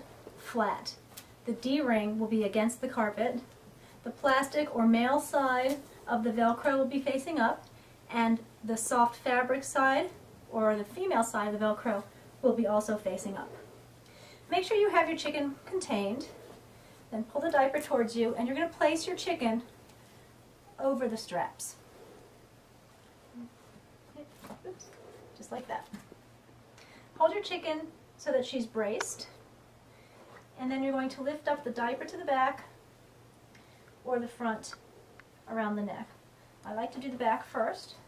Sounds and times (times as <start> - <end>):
Speech: 0.4 - 13.6, 14.5 - 16.4, 17.1 - 19.7, 20.8 - 21.8, 24.2 - 26.0, 27.2 - 29.4, 30.6 - 32.8, 34.0 - 34.8, 35.5 - 38.0.